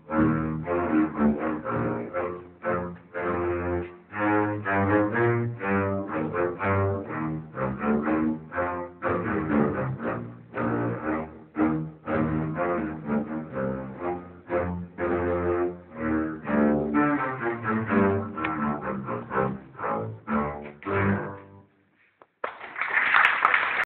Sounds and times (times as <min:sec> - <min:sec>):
Double bass: 0:00.0 - 0:21.8.